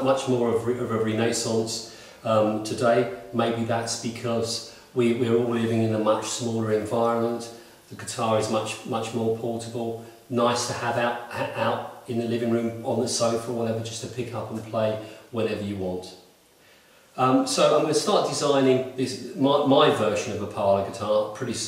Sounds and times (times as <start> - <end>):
Speech: 0.0 - 16.2, 17.2 - 21.6.